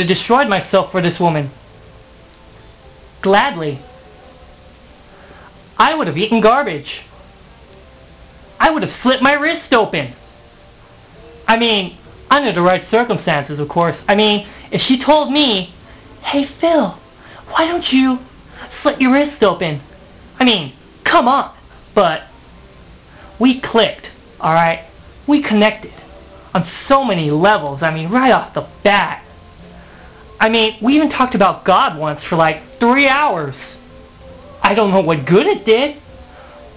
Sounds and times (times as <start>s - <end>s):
Narration, monologue: 0.0s - 1.6s, 3.2s - 3.9s, 5.2s - 7.1s, 8.5s - 10.3s, 11.5s - 22.4s, 23.1s - 36.2s.